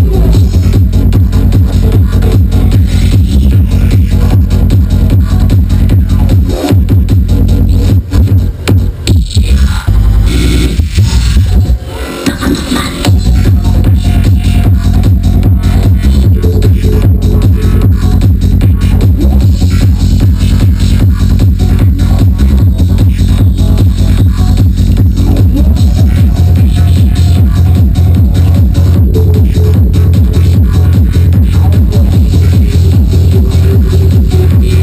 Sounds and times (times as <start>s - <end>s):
Trance music: 0.0s - 34.8s.